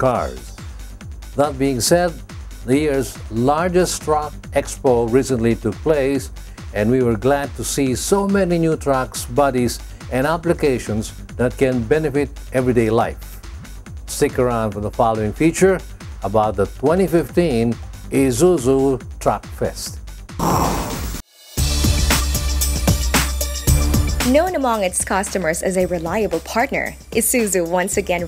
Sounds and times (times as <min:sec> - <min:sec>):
Speech: 0:00.0 - 0:00.5, 0:01.4 - 0:13.2, 0:14.1 - 0:20.0, 0:24.2 - 0:28.2
Music: 0:00.0 - 0:28.2.